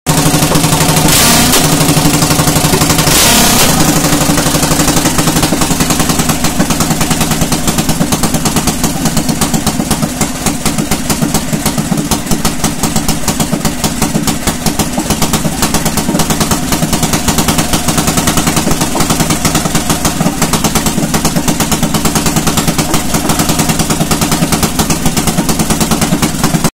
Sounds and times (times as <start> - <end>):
Idling: 0.1 - 26.7.